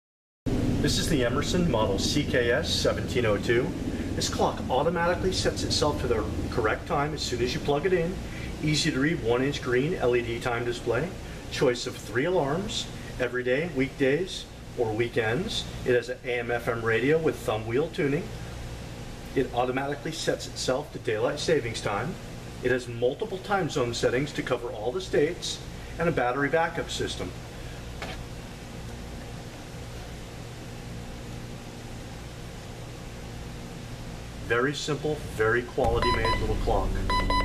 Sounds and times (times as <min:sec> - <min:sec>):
Speech: 0:00.8 - 0:18.3, 0:19.3 - 0:27.4, 0:34.4 - 0:37.1.